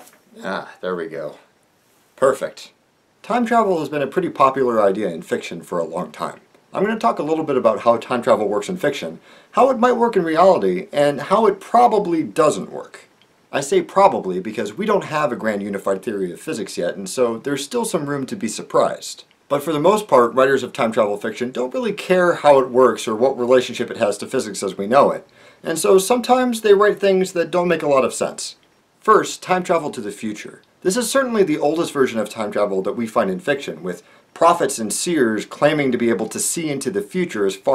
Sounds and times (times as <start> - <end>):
Speech: 0.0 - 1.5, 2.2 - 37.7.